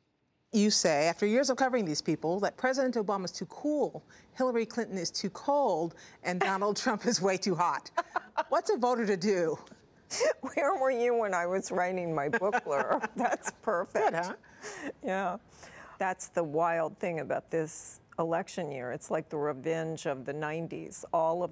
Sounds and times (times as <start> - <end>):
Speech: 10.5 - 14.4.